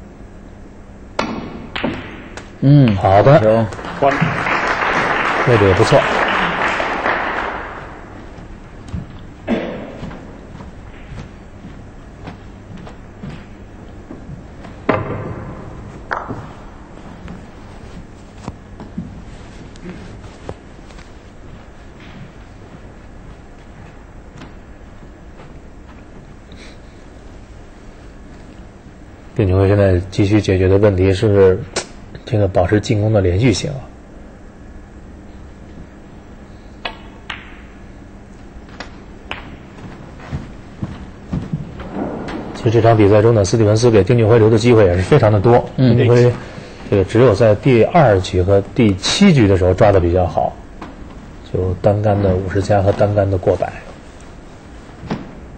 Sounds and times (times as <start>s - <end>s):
Speech: 2.6s - 4.4s, 5.4s - 6.2s, 29.4s - 34.0s, 42.6s - 50.6s, 51.4s - 53.9s.